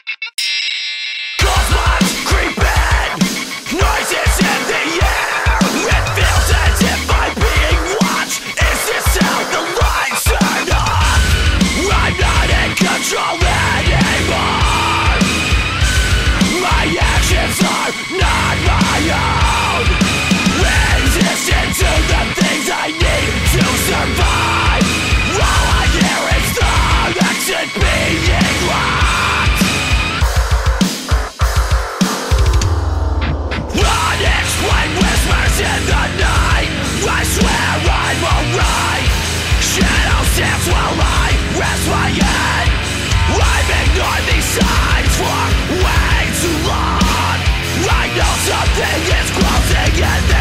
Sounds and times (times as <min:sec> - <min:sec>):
Angry music: 0:00.0 - 0:50.4.